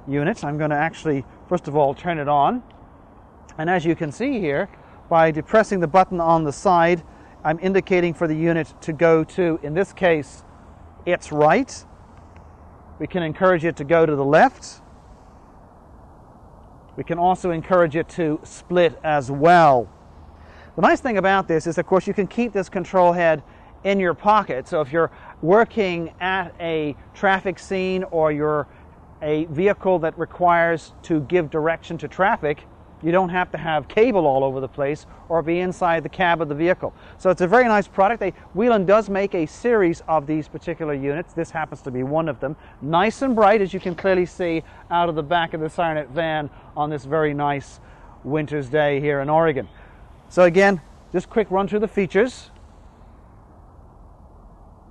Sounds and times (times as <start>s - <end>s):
Speech: 0.0s - 2.7s, 3.5s - 10.4s, 11.1s - 11.9s, 13.0s - 14.8s, 17.0s - 19.9s, 20.8s - 49.7s, 50.3s - 52.6s.